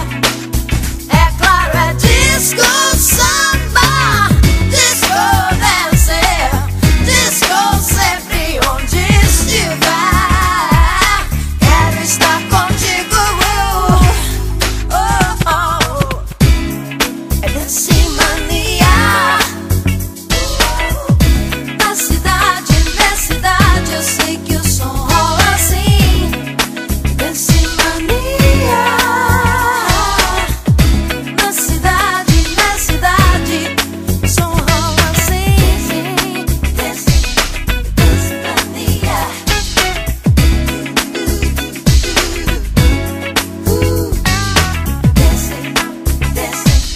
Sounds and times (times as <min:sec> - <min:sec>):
Soul music: 0:00.0 - 0:46.9.